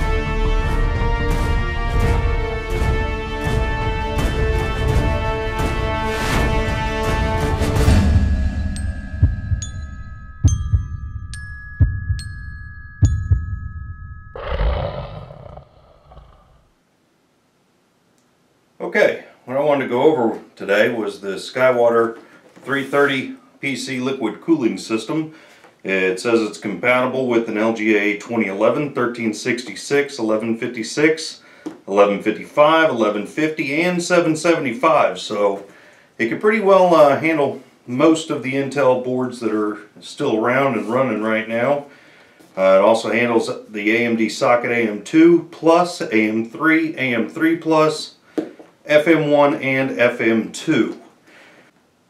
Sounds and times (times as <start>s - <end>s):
Speech: 18.8s - 41.9s, 42.6s - 48.2s, 48.9s - 51.1s.